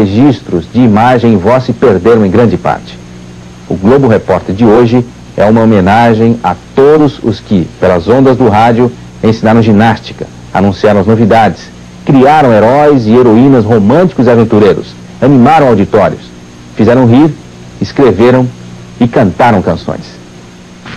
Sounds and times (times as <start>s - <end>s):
Speech: 0.0s - 3.0s, 3.7s - 20.2s.